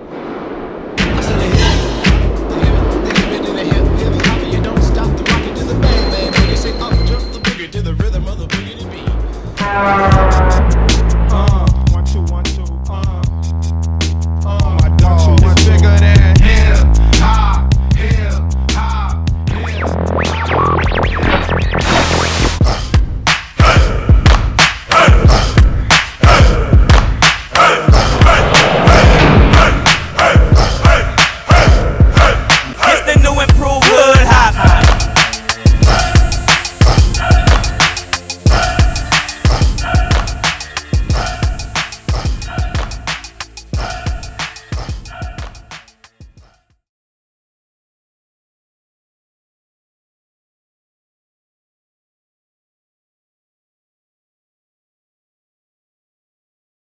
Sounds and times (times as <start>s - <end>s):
Independent music: 1.0s - 46.4s.